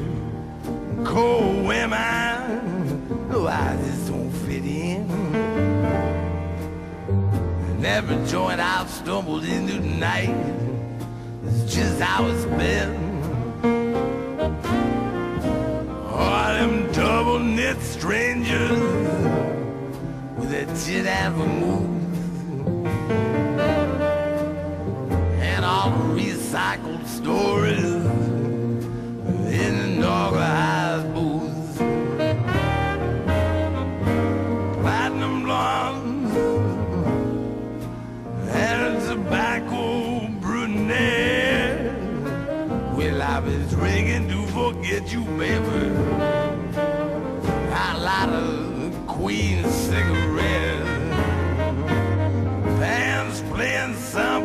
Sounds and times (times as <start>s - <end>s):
Music: 0.0s - 54.4s.